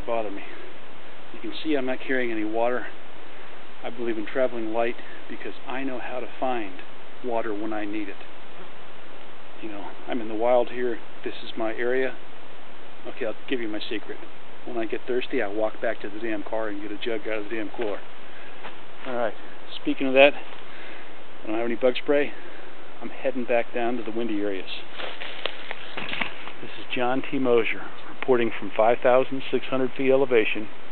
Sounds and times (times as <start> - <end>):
Speech: 0.0 - 0.6, 1.4 - 3.0, 3.8 - 8.2, 9.6 - 12.2, 13.0 - 18.0, 19.0 - 20.5, 21.4 - 22.4, 23.0 - 24.9, 26.6 - 30.7.